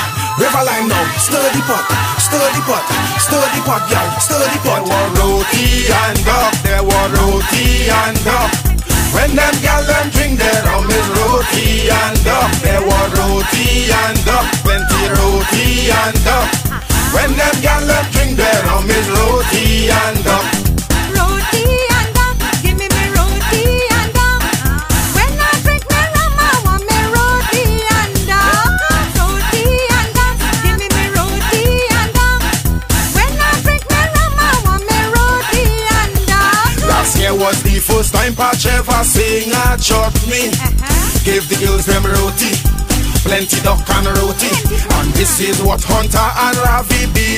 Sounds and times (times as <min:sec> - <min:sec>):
Music: 0:00.0 - 0:47.3.